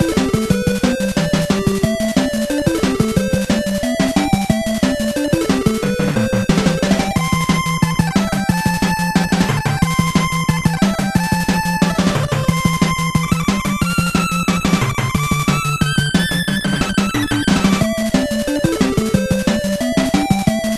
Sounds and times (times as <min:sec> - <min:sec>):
Music: 0:00.0 - 0:20.7.